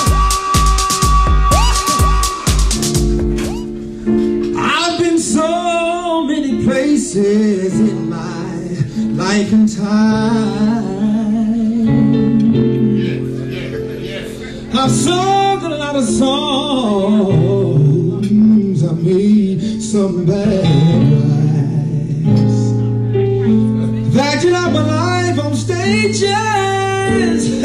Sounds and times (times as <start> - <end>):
Music: 0.0 - 27.6.